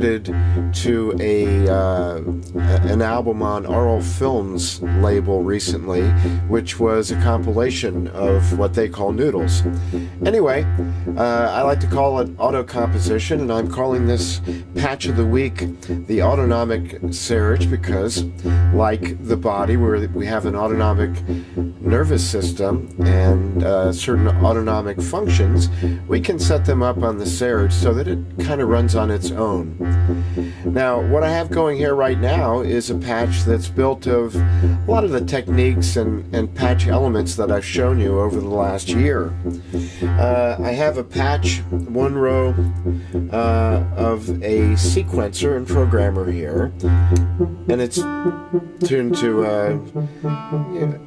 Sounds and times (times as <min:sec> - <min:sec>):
Speech: 0:00.0 - 0:29.8, 0:30.7 - 0:39.4, 0:40.0 - 0:42.7, 0:43.3 - 0:46.8, 0:47.7 - 0:48.1, 0:48.8 - 0:49.9, 0:50.7 - 0:51.0
Music: 0:00.0 - 0:51.0.